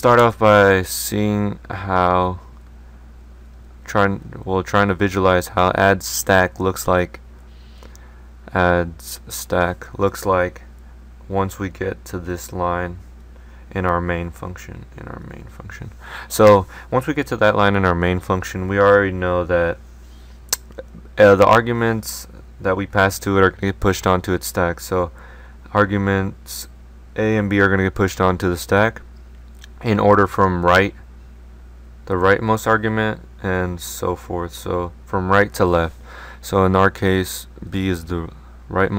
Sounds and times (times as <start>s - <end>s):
Speech: 0.0s - 2.5s, 3.8s - 7.2s, 8.5s - 10.7s, 11.3s - 13.0s, 13.7s - 19.8s, 20.6s - 31.0s, 32.1s - 38.9s.